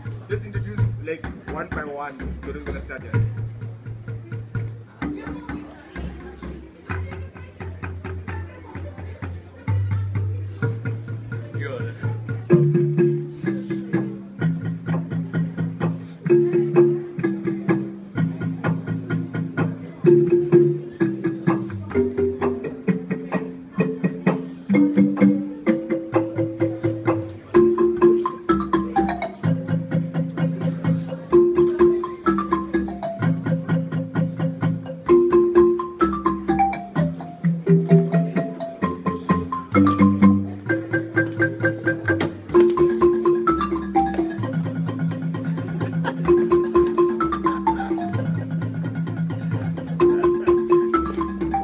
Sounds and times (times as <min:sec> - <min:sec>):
Music: 0:00.0 - 0:51.6.